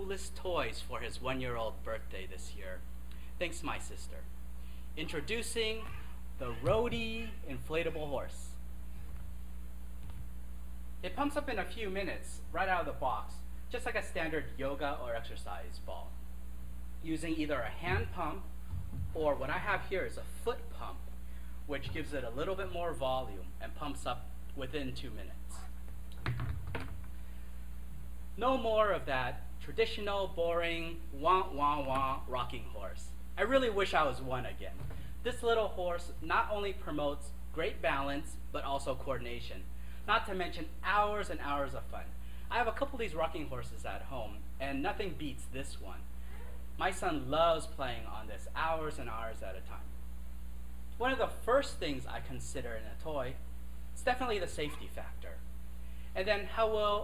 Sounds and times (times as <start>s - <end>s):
Speech: 0.0s - 2.8s, 3.4s - 4.3s, 5.0s - 8.6s, 11.0s - 16.2s, 17.0s - 18.5s, 19.1s - 21.1s, 21.7s - 25.8s, 28.4s - 49.9s, 51.0s - 53.4s, 54.0s - 55.4s, 56.2s - 57.0s.